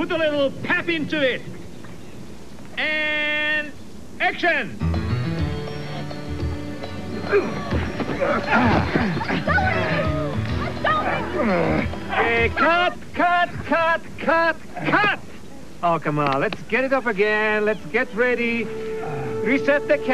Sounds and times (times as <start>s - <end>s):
Music: 4.8s - 13.0s, 17.5s - 20.1s.